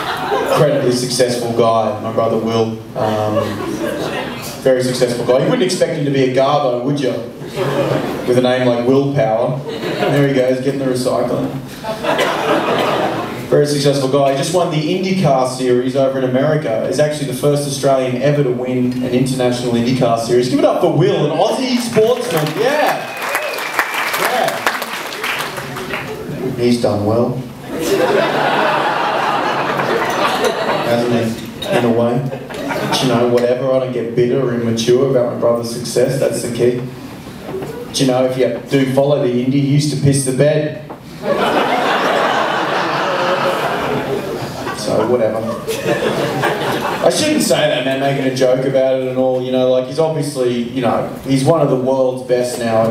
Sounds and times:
Speech: 0.5 - 3.6, 4.6 - 7.3, 8.3 - 11.6, 13.5 - 23.1, 26.4 - 27.5, 30.8 - 36.9, 37.9 - 40.9, 44.7 - 45.7, 47.0 - 52.9.

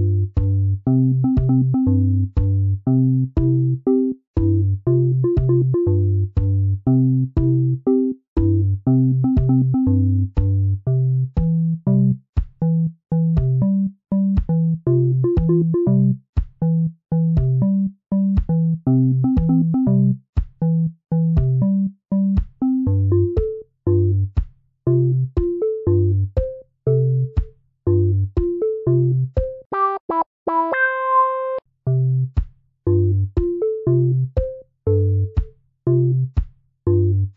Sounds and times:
Music: 0.0 - 37.3.

